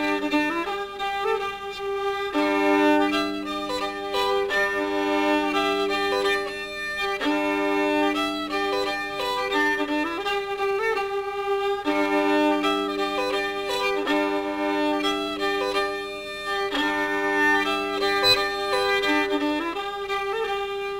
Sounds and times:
Classical music: 0.0s - 20.9s
Violin, fiddle: 0.0s - 20.9s.

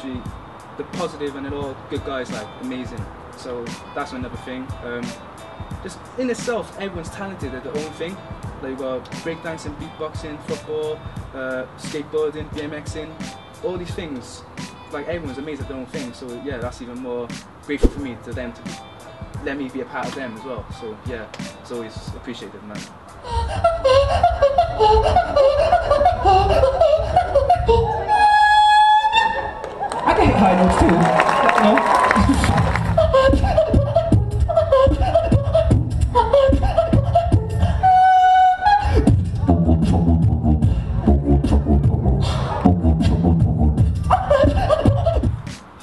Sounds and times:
Beatboxing: 5.8s - 18.8s, 31.9s - 45.8s.

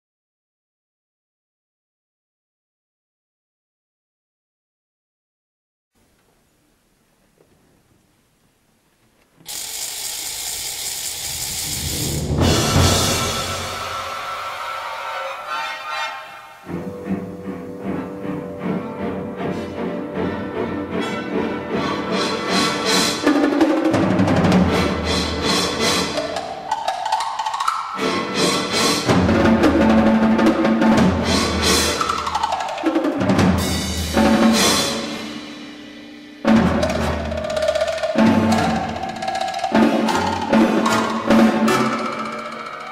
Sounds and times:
Orchestra: 11.4s - 42.9s.

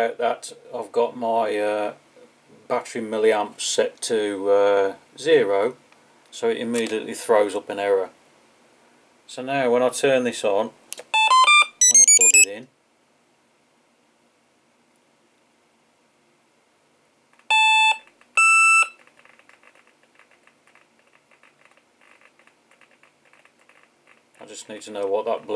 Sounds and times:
Inside, small room: 0.0s - 25.5s
Beep, bleep: 11.2s - 12.5s, 17.5s - 19.0s.

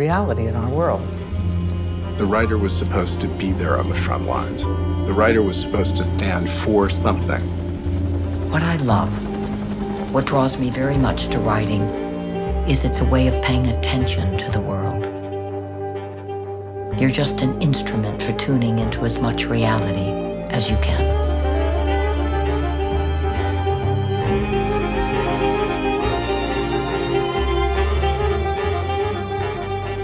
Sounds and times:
Speech: 0.0s - 1.0s, 2.2s - 7.4s, 10.1s - 11.9s, 12.7s - 15.1s, 17.0s - 21.2s
Bowed string instrument: 0.0s - 30.0s.

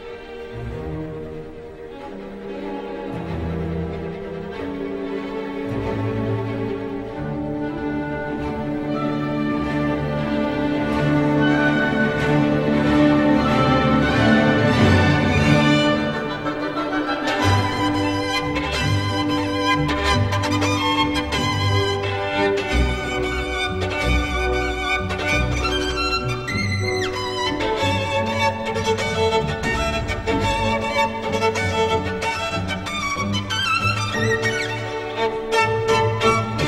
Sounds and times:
Violin, fiddle: 0.0s - 36.6s.

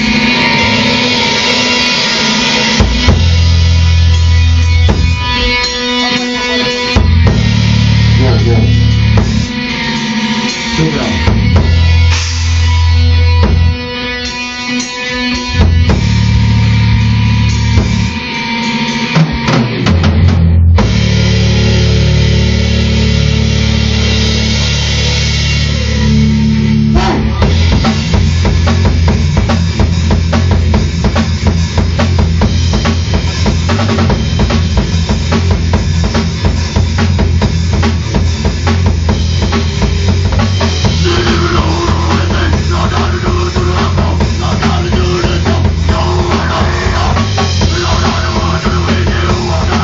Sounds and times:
Music: 0.0s - 49.8s.

